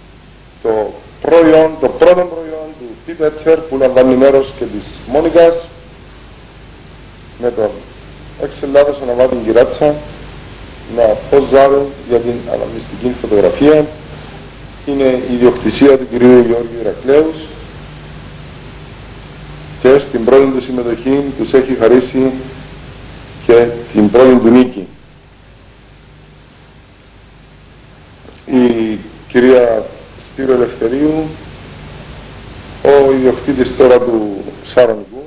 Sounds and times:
Speech: 0.6 - 5.8, 7.4 - 10.2, 10.9 - 14.0, 14.8 - 17.6, 19.8 - 22.6, 23.4 - 25.0, 28.3 - 31.4, 32.8 - 35.2.

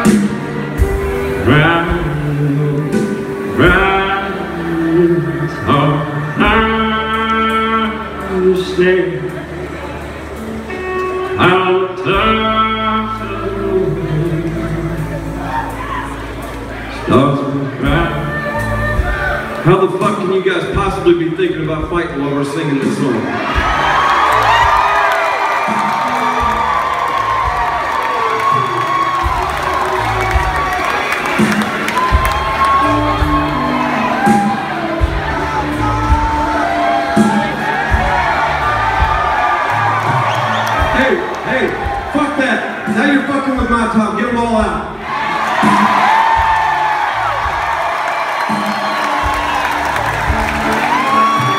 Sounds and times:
Music: 0.0 - 51.5.

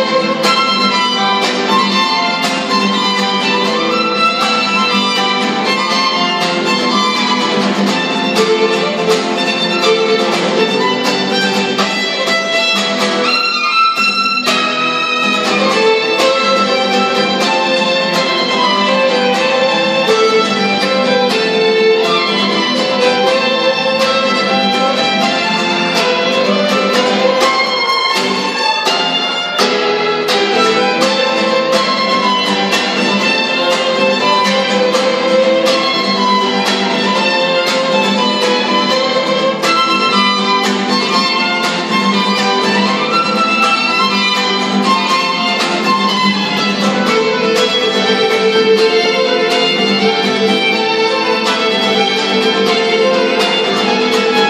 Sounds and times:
Guitar: 0.0 - 54.4
Violin, fiddle: 0.0 - 54.4.

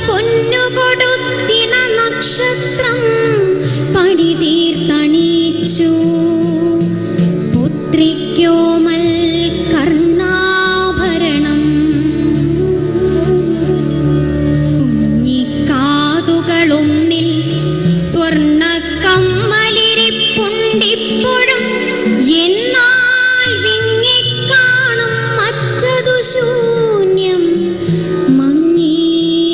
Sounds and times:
Music of Asia: 0.0 - 29.5.

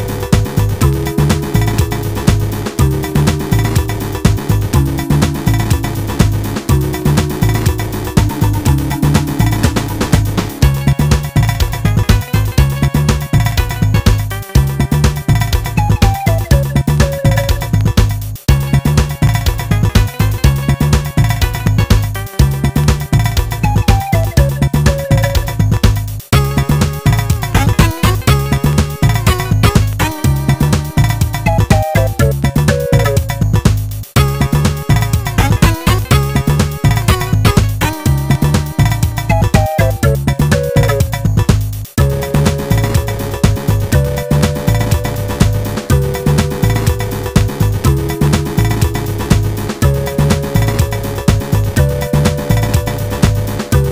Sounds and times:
Music: 0.0 - 53.9.

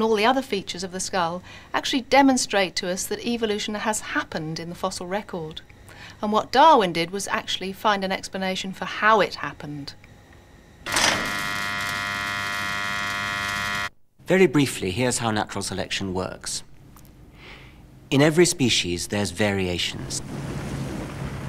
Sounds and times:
Speech: 0.0 - 5.6, 6.2 - 10.0, 14.3 - 16.7, 18.1 - 20.2.

